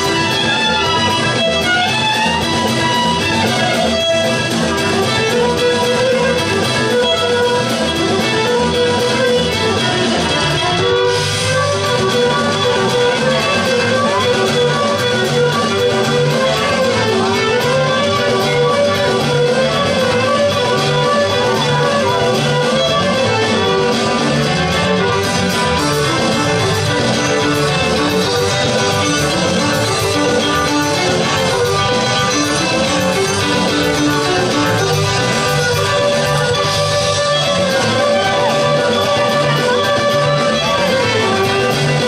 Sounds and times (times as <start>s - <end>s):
Music of Latin America: 0.0s - 42.0s.